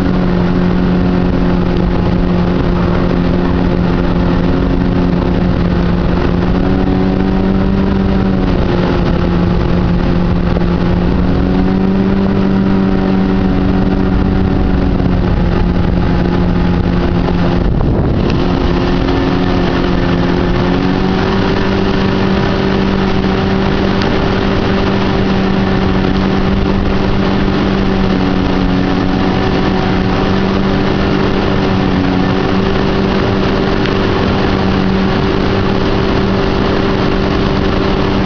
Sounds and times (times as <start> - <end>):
Motorboat, speedboat: 0.0 - 38.2.